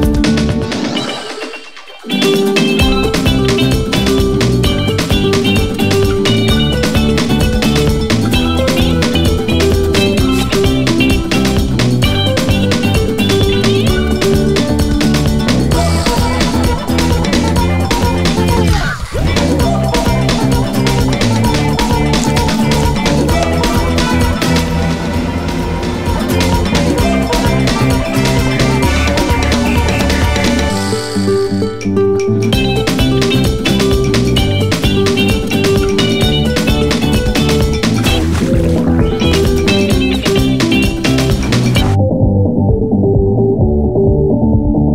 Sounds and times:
Soundtrack music: 0:00.0 - 0:44.9.

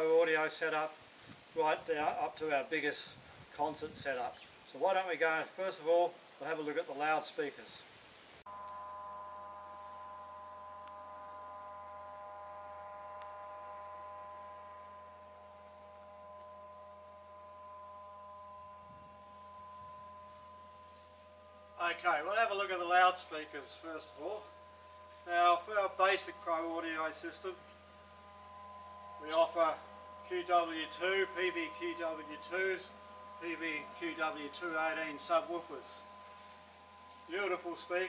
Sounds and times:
Pulse: 0:08.5 - 0:38.0.

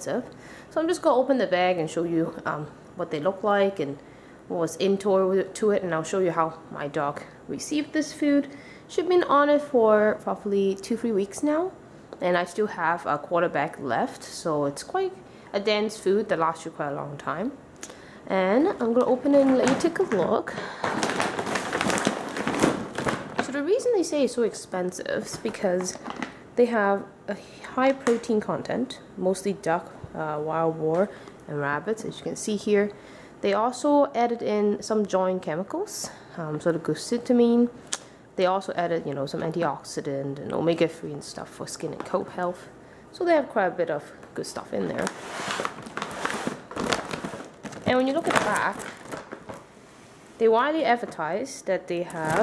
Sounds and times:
Speech: 0:00.0 - 0:17.6, 0:18.3 - 0:20.6, 0:23.4 - 0:26.0, 0:26.6 - 0:37.8, 0:38.4 - 0:45.1, 0:47.8 - 0:48.9, 0:50.4 - 0:52.4.

